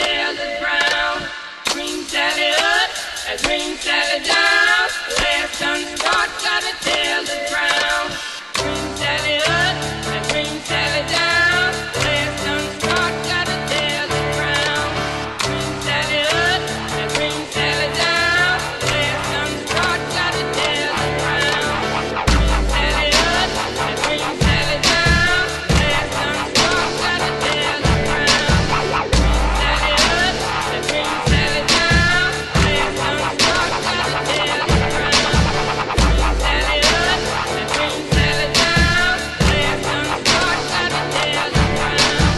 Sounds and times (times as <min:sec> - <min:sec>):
Music: 0:00.0 - 0:42.3.